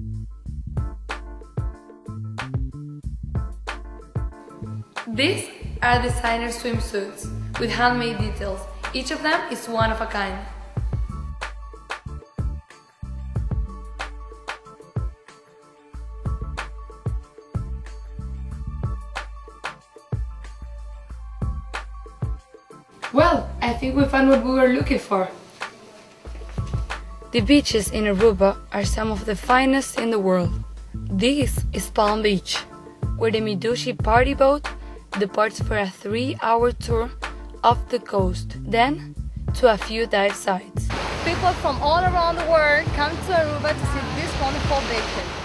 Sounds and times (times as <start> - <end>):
Music: 0.0 - 45.4
Speech: 5.1 - 10.5, 23.1 - 26.1, 27.4 - 45.3.